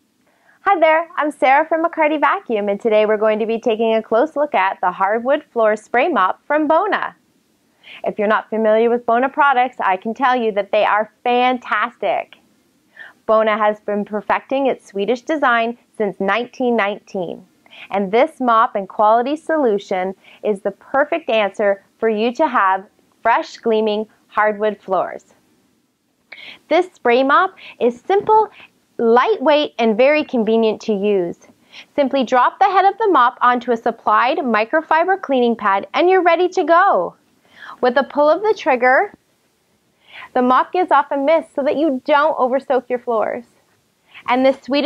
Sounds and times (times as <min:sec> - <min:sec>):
Speech: 0:00.7 - 0:07.2, 0:07.9 - 0:12.4, 0:13.2 - 0:25.3, 0:26.4 - 0:37.2, 0:37.8 - 0:39.2, 0:40.3 - 0:43.5, 0:44.2 - 0:44.8.